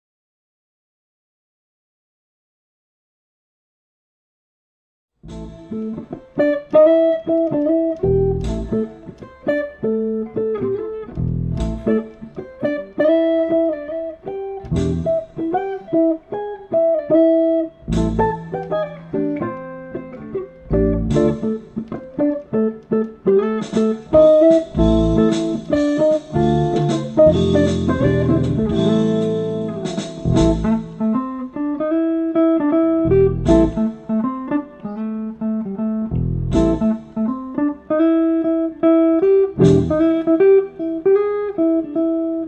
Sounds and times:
Guitar: 5.2s - 42.4s
Inside, small room: 5.2s - 42.4s.

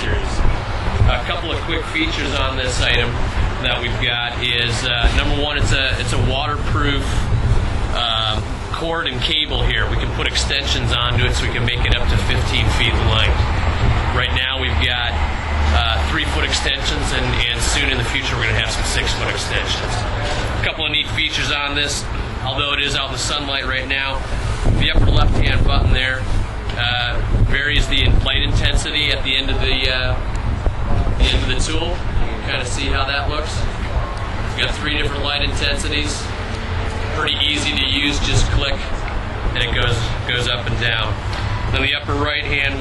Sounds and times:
Speech: 0.0s - 7.3s, 7.9s - 13.5s, 14.1s - 30.3s, 30.9s - 36.3s, 37.0s - 42.8s.

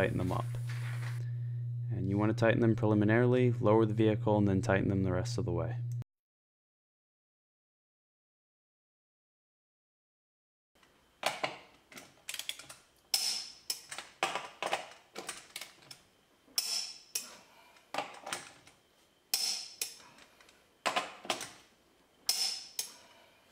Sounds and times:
Speech: 0.0s - 0.5s, 1.9s - 5.8s.

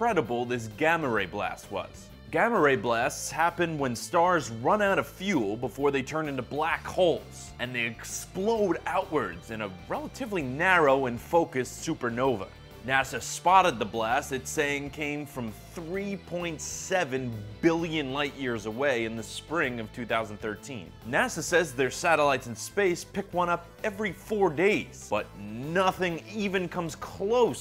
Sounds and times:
Music: 0.0s - 27.6s
Speech: 0.0s - 27.6s.

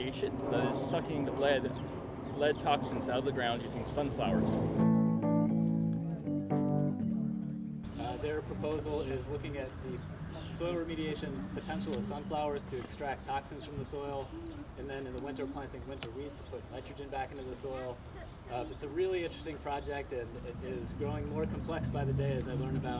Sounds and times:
Speech: 0.0s - 1.8s, 2.4s - 4.6s, 8.0s - 22.9s
Music: 4.4s - 8.0s.

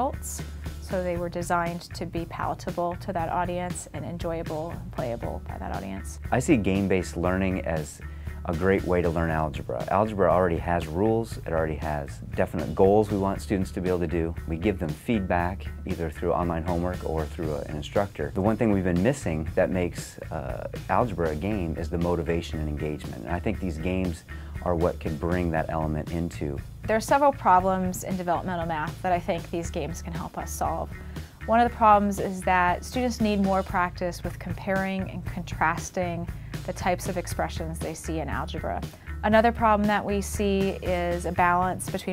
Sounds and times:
Speech: 0.0s - 30.8s
Music: 0.0s - 42.1s.

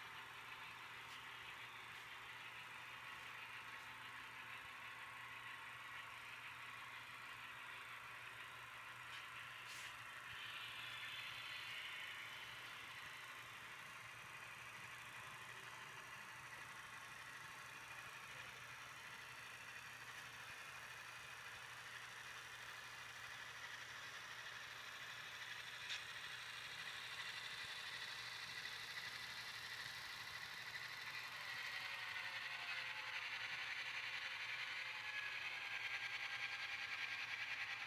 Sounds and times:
Railroad car, train wagon: 0.0s - 37.8s
Train: 0.0s - 37.8s.

